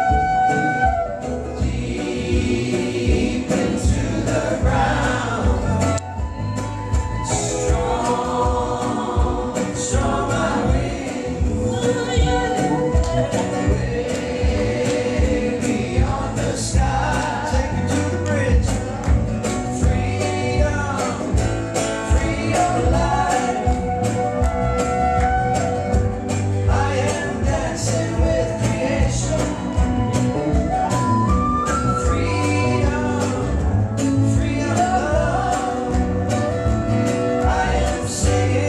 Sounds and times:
Music: 0.0 - 38.6.

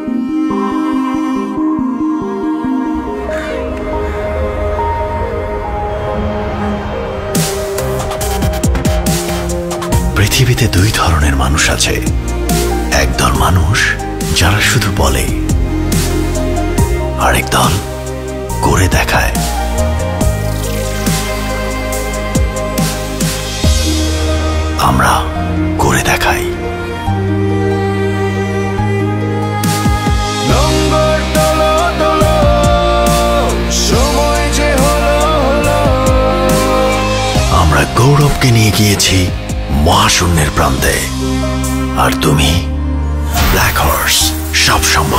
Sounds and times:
Music: 0.0 - 45.1
Speech: 10.1 - 12.1, 12.9 - 15.4, 17.2 - 17.9, 18.6 - 19.4, 24.8 - 26.6, 37.4 - 41.2, 42.0 - 42.7, 43.4 - 45.1.

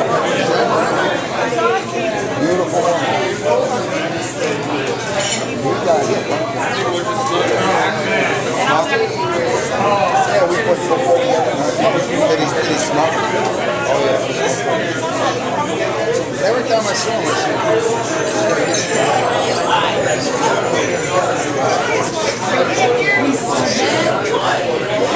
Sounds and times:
Speech: 0.0 - 25.1.

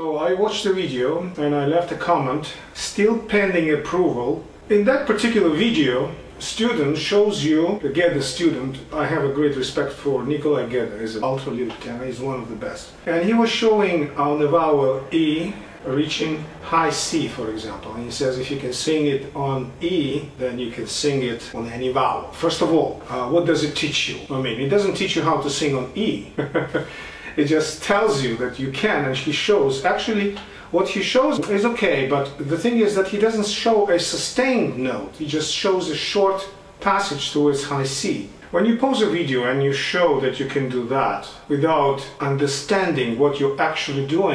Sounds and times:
Speech: 0.0 - 44.3.

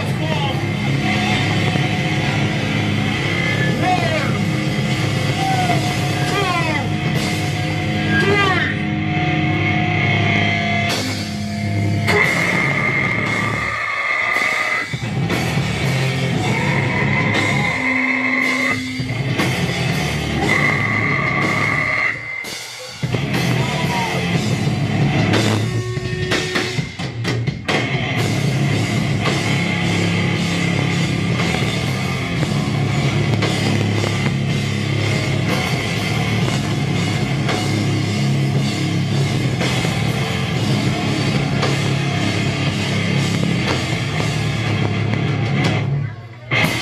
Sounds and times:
Crowd: 0.0 - 46.8
Rock music: 0.0 - 46.8.

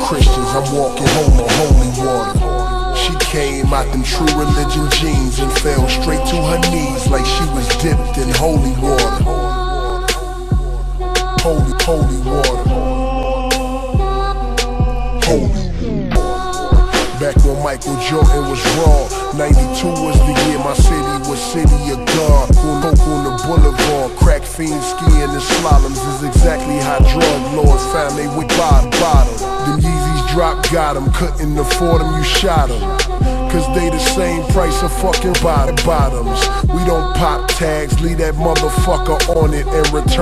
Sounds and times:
Music: 0.0 - 40.2.

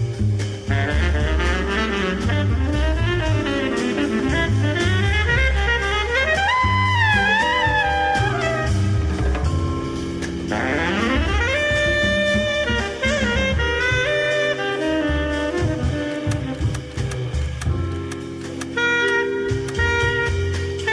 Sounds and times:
Music: 0.0 - 20.9.

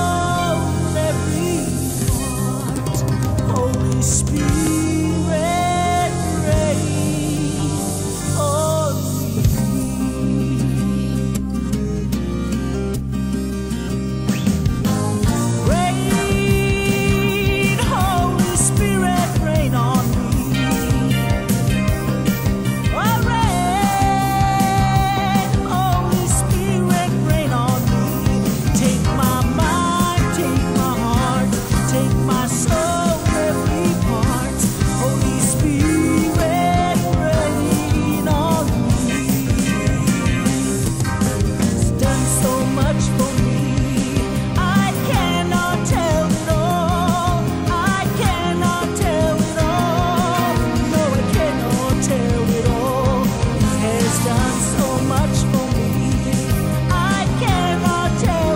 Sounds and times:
Music: 0.0 - 58.5.

